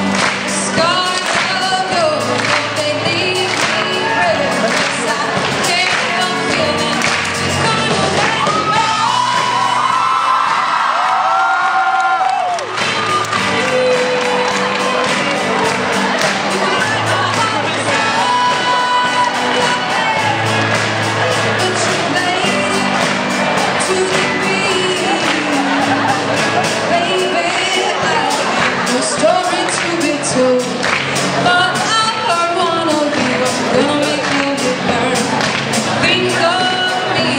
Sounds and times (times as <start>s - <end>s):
Singing: 0.0s - 11.0s, 12.4s - 37.3s
Music: 0.0s - 37.3s.